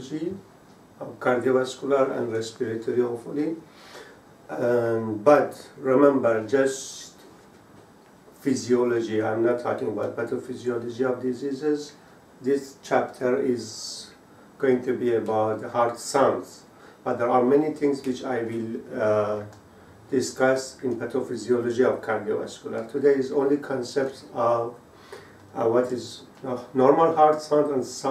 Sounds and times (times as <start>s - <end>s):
Speech: 0.0s - 3.7s, 4.5s - 7.3s, 8.4s - 24.8s, 25.5s - 28.1s.